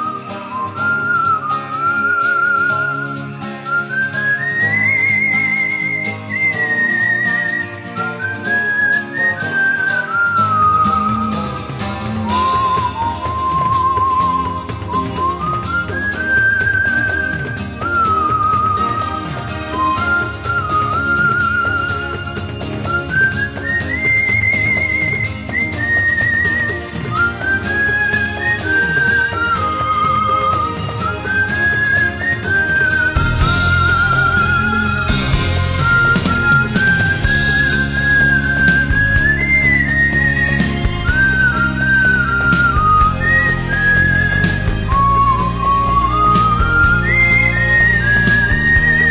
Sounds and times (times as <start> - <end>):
Music: 0.0 - 49.1.